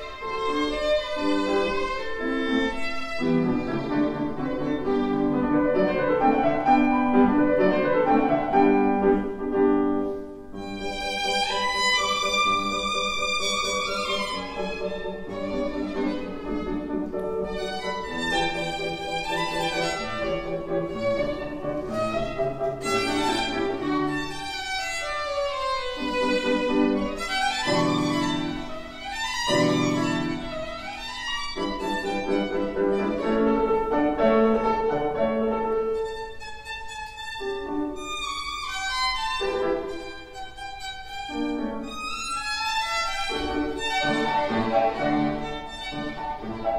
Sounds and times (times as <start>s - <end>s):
Violin, fiddle: 0.0s - 46.7s.